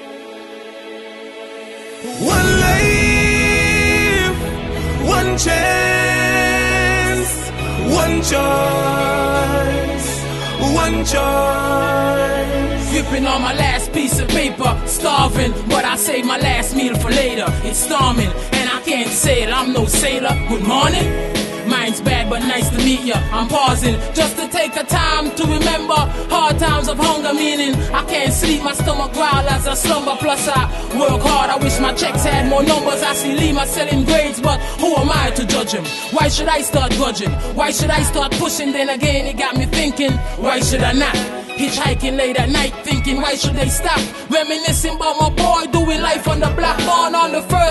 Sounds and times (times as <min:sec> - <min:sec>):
Music: 0:00.0 - 0:47.7.